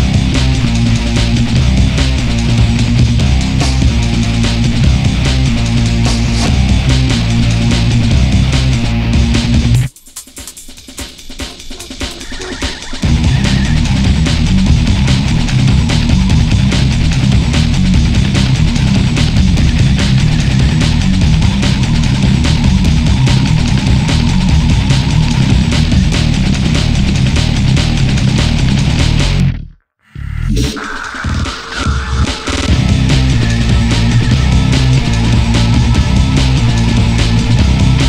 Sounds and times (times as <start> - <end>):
Exciting music: 0.0 - 10.4, 11.0 - 29.5, 30.5 - 38.0.